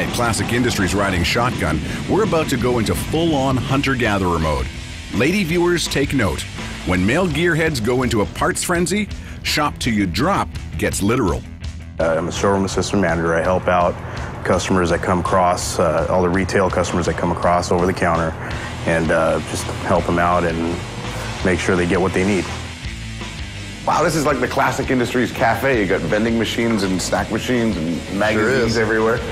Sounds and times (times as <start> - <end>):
Speech: 0.0 - 11.4, 12.0 - 20.8, 21.4 - 22.5, 23.9 - 29.3
Music: 0.0 - 29.3.